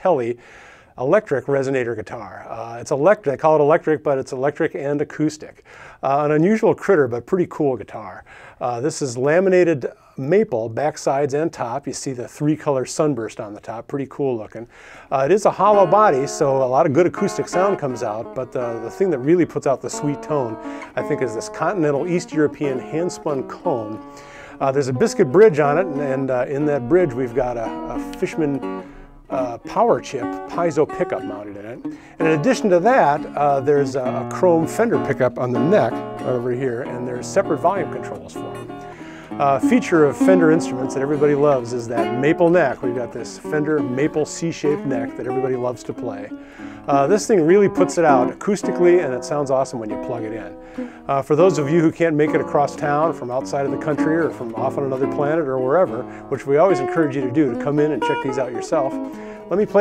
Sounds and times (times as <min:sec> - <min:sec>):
Speech: 0:00.0 - 0:00.4, 0:01.0 - 0:24.0, 0:24.6 - 0:28.7, 0:29.3 - 0:38.4, 0:39.4 - 0:59.8
Strum: 0:14.4 - 0:59.8.